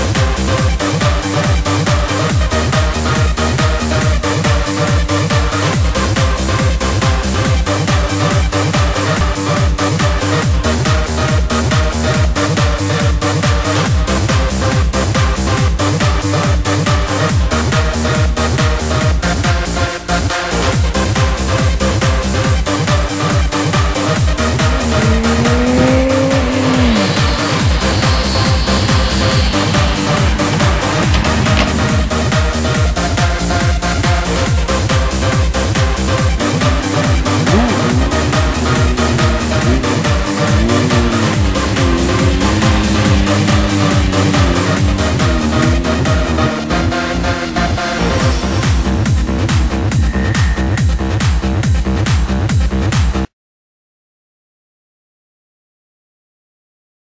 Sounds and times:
Music: 0.0 - 53.3.

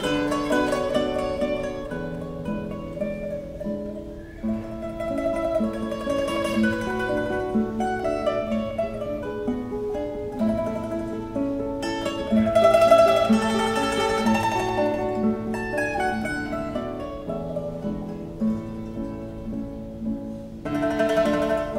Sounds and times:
Guitar: 0.0 - 21.7
Mandolin: 0.0 - 21.7.

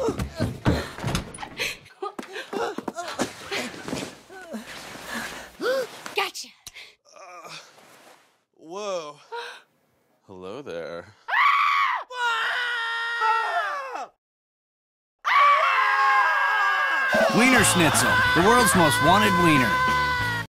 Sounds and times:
Speech: 17.2 - 19.8
Music: 17.7 - 20.4.

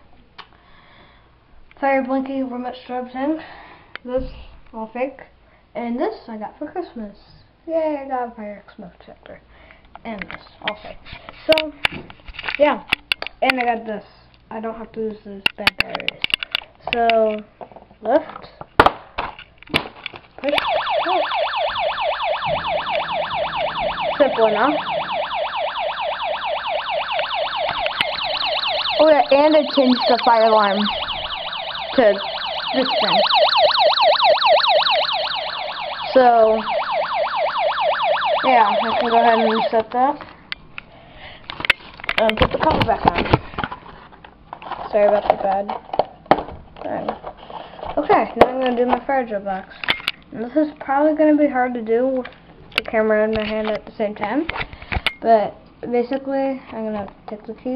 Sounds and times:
Speech: 1.8 - 3.4, 4.0 - 9.4, 10.0 - 11.8, 12.6 - 16.2, 16.9 - 18.6, 20.4 - 21.3, 24.2 - 24.8, 29.0 - 31.0, 32.0 - 33.2, 36.1 - 36.7, 38.4 - 40.2, 42.2 - 43.3, 44.9 - 45.8, 46.8 - 47.2, 48.0 - 49.7, 50.3 - 54.5, 55.2 - 57.7.

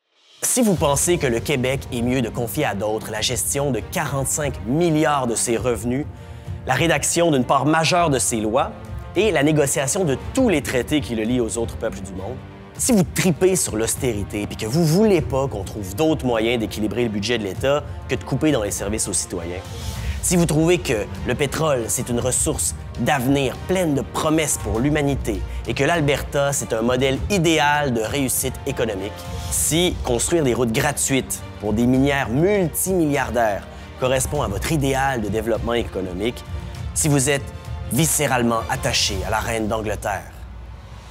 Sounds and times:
Music: 0.0 - 41.1
Speech: 0.4 - 36.4, 37.0 - 40.4.

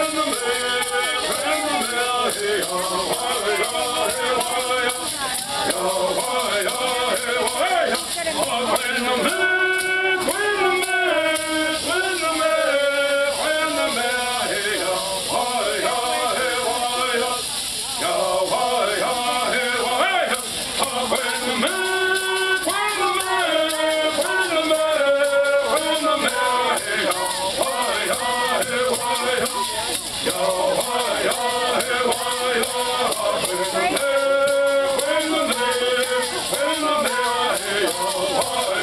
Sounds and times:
Choir: 0.0 - 38.8
Male singing: 0.0 - 38.8.

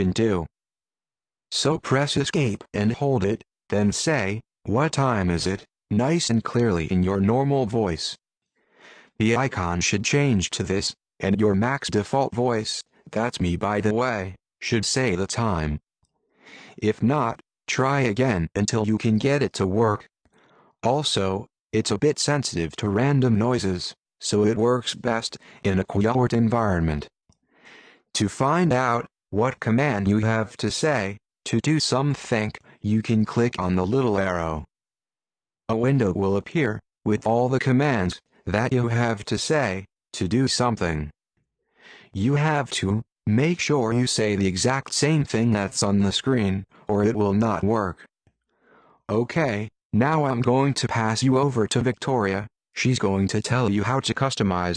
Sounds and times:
Male speech, man speaking: 0.0 - 0.5, 1.5 - 8.2, 9.2 - 15.9, 16.8 - 20.1, 20.8 - 27.1, 28.2 - 34.7, 35.7 - 41.2, 42.2 - 48.1, 49.1 - 54.7
Narration, monologue: 0.0 - 54.7.

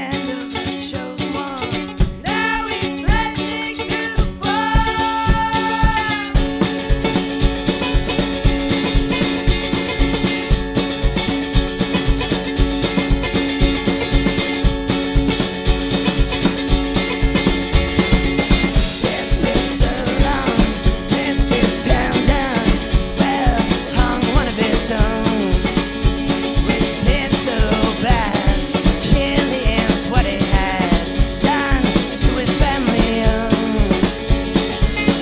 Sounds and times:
Blues: 0.0 - 35.2.

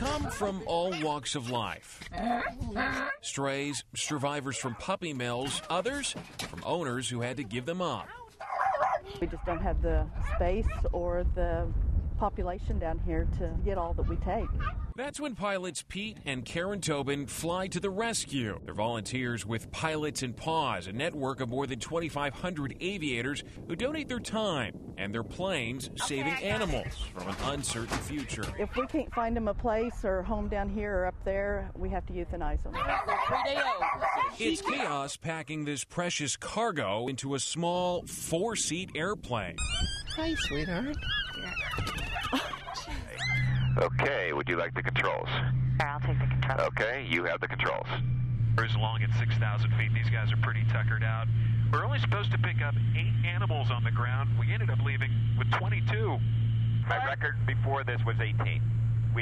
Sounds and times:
Dog: 0.1 - 1.7, 4.6 - 5.9, 8.0 - 10.9, 32.8 - 34.4, 39.7 - 43.7.

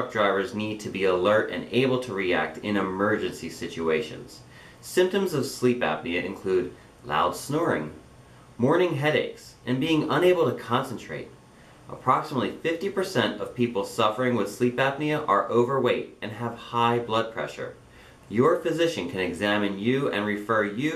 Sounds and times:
Speech: 0.0 - 8.0, 8.6 - 20.9.

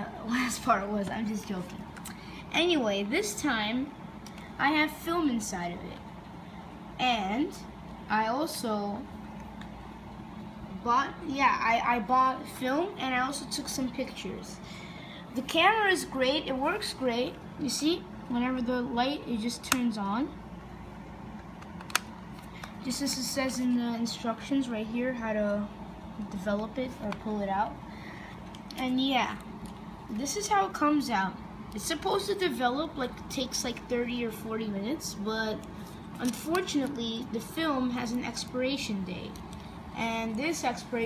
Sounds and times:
Speech: 0.0 - 1.8, 2.4 - 4.0, 4.6 - 6.1, 7.0 - 9.1, 10.8 - 14.6, 15.3 - 20.4, 22.8 - 27.8, 28.7 - 29.5, 30.1 - 39.4, 40.0 - 41.0.

